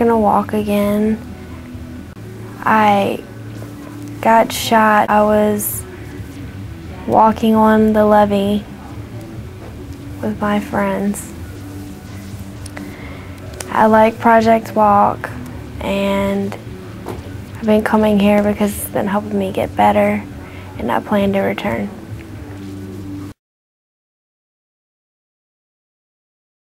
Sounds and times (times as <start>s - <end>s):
Speech: 0.0s - 1.2s, 2.6s - 3.3s, 4.2s - 5.8s, 7.0s - 9.0s, 10.2s - 11.3s, 13.6s - 16.6s, 17.6s - 22.0s.